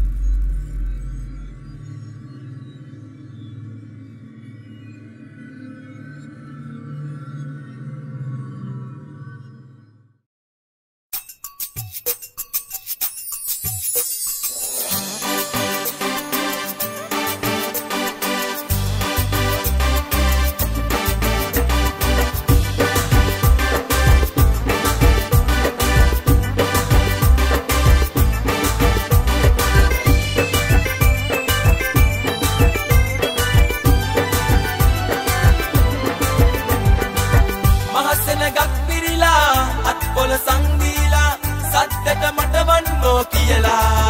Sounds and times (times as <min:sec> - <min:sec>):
Music: 0:11.2 - 0:44.1.